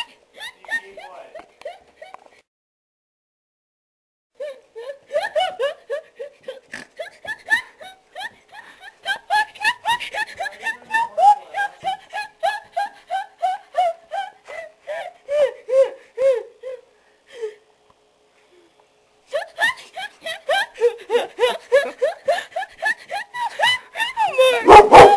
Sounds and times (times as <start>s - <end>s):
Laughter: 0.0s - 2.3s, 4.4s - 15.9s, 19.3s - 25.1s
Speech: 10.4s - 12.0s.